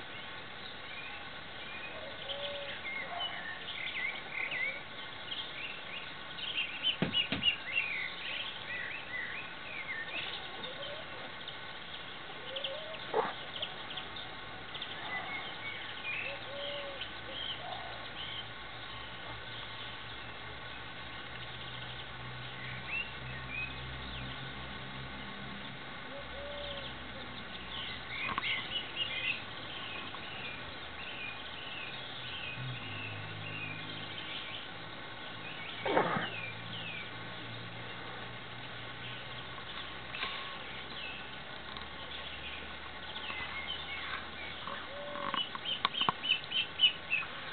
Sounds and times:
Bird: 0.0s - 20.3s, 26.1s - 34.7s, 35.4s - 37.6s, 39.0s - 47.5s.

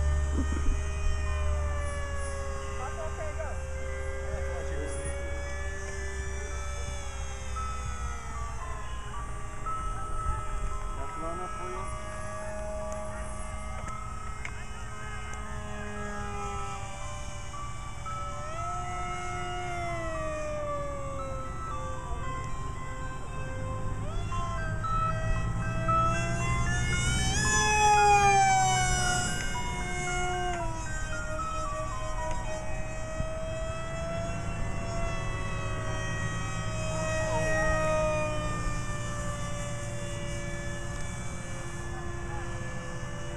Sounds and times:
Speech: 2.8s - 3.6s.

